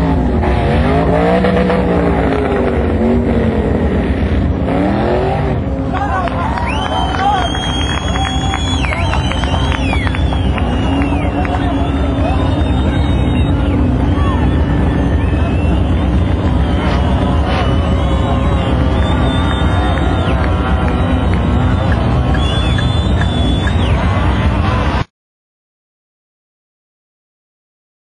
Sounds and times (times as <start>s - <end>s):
Car: 0.0s - 25.1s.